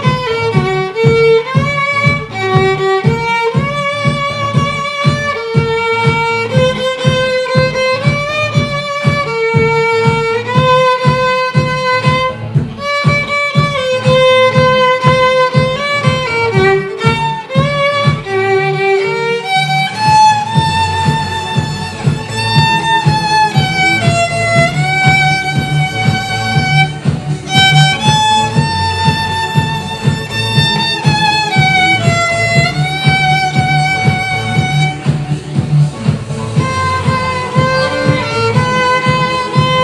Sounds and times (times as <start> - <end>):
Violin, fiddle: 0.0 - 39.8.